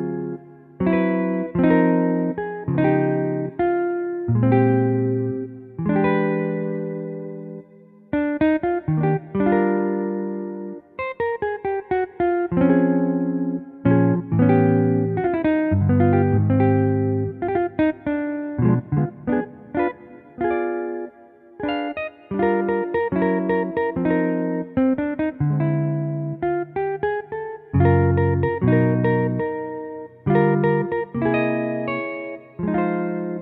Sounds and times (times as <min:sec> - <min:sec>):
Electronic organ: 0:00.0 - 0:08.0, 0:12.5 - 0:33.4.